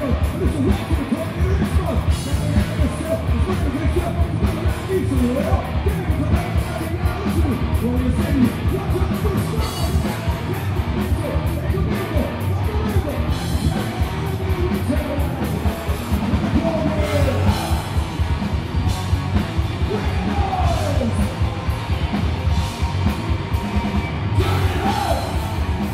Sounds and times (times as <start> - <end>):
Music: 0.0 - 25.9.